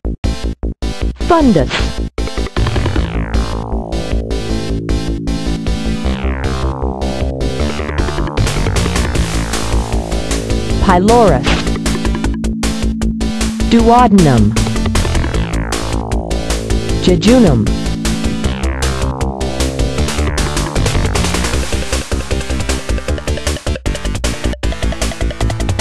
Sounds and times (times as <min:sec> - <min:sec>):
Music: 0:00.0 - 0:25.8
Speech: 0:01.2 - 0:01.9, 0:10.8 - 0:11.6, 0:13.7 - 0:14.6, 0:17.0 - 0:17.7.